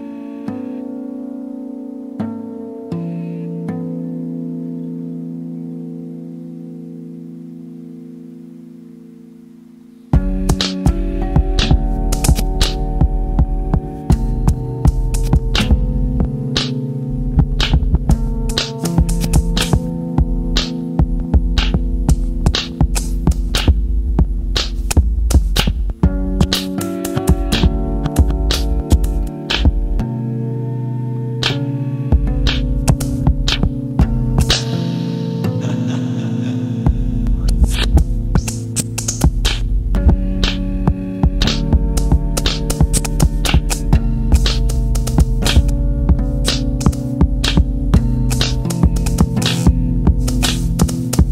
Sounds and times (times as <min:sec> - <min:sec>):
Music: 0:00.0 - 0:51.3.